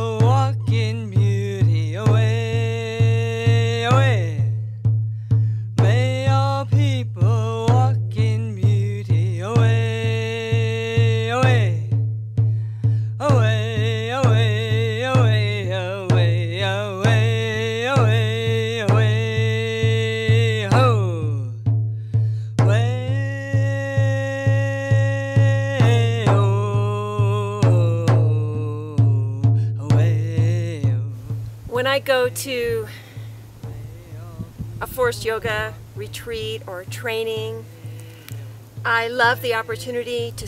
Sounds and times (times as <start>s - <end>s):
Music: 0.0s - 40.4s
Speech: 31.7s - 32.9s, 34.1s - 37.7s, 38.9s - 40.4s.